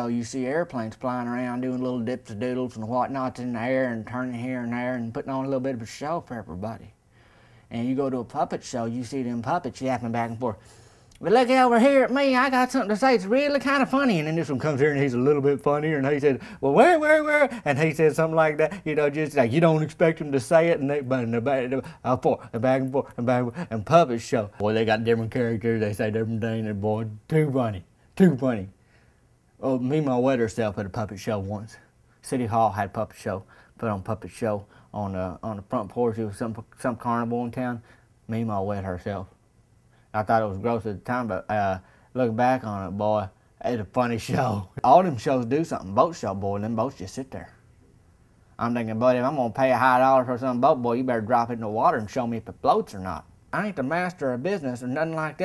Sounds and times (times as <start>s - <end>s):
Speech: 0.0s - 7.0s, 7.7s - 10.6s, 11.2s - 28.8s, 29.6s - 39.4s, 40.1s - 47.6s, 48.6s - 55.4s.